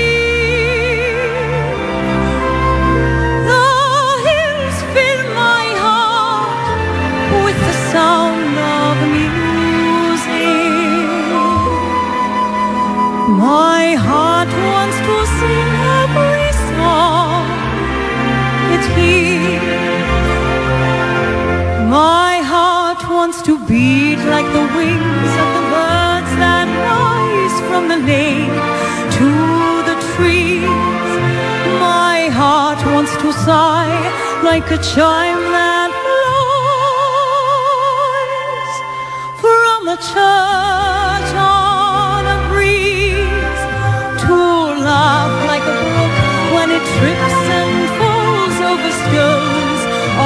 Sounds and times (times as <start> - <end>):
Independent music: 0.0 - 50.2
Tender music: 0.0 - 50.2
Traditional music: 1.2 - 22.0, 43.2 - 50.2.